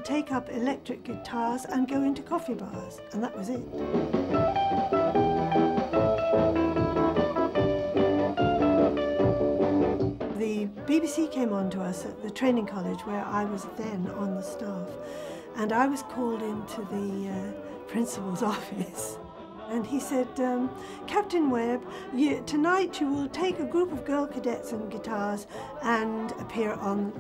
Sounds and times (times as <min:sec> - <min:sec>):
Speech: 0:00.0 - 0:03.7, 0:10.4 - 0:15.0, 0:15.6 - 0:27.2
Music: 0:00.0 - 0:27.2.